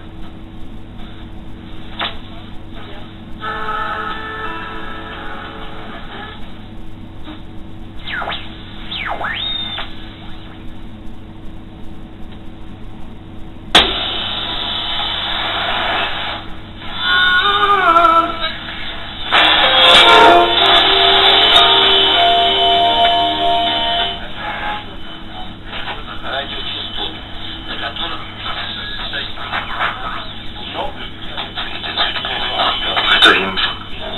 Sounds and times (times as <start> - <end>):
Radio: 2.0 - 4.2, 8.0 - 10.8, 13.8 - 17.2, 18.2 - 22.3, 23.1 - 34.1.